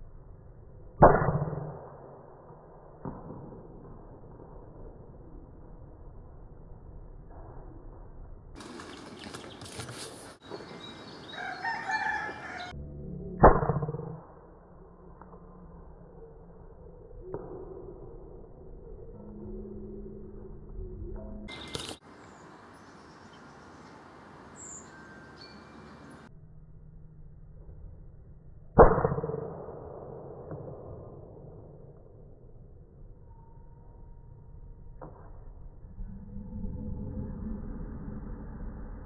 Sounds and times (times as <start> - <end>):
Chirp, tweet: 10.4 - 11.9, 24.6 - 26.3.